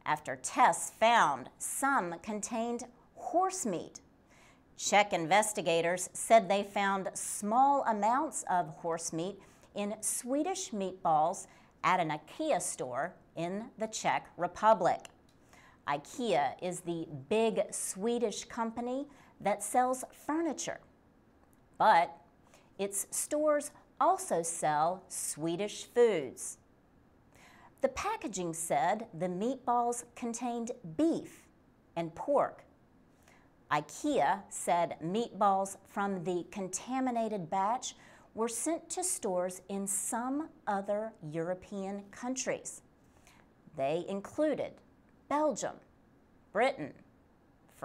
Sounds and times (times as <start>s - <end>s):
Speech: 0.0s - 4.0s, 4.8s - 15.1s, 15.9s - 20.8s, 21.8s - 22.2s, 22.8s - 26.6s, 27.8s - 31.4s, 32.0s - 32.7s, 33.7s - 42.8s, 43.7s - 45.9s, 46.6s - 47.1s.